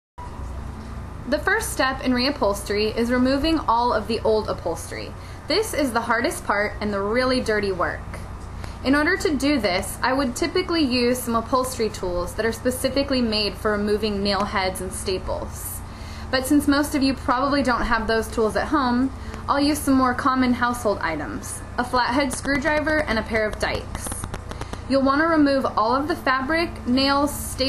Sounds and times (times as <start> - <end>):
Speech: 1.3 - 8.2, 8.8 - 24.3, 24.9 - 27.6.